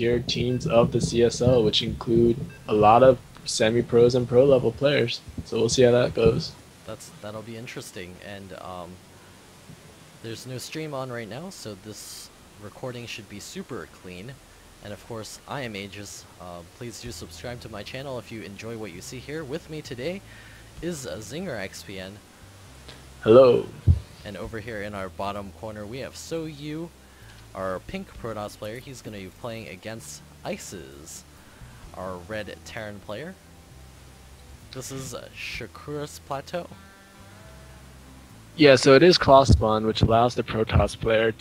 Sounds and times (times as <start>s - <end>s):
Speech: 0.0s - 9.0s, 10.2s - 20.2s, 20.8s - 22.2s, 23.2s - 26.9s, 27.5s - 31.2s, 31.9s - 33.4s, 34.7s - 36.8s, 38.6s - 41.4s
Music: 0.0s - 41.4s.